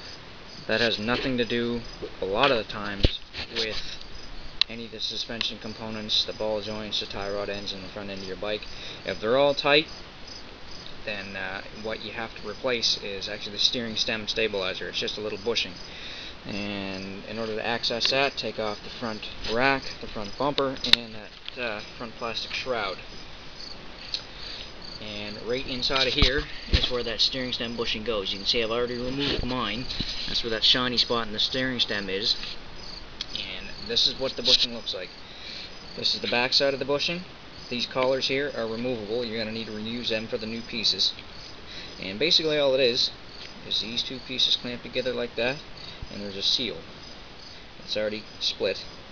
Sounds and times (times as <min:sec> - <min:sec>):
Speech: 0:00.7 - 0:04.0, 0:04.7 - 0:09.9, 0:11.1 - 0:15.8, 0:16.5 - 0:23.0, 0:25.0 - 0:32.4, 0:33.3 - 0:35.1, 0:36.0 - 0:41.2, 0:42.0 - 0:46.9, 0:47.9 - 0:48.9.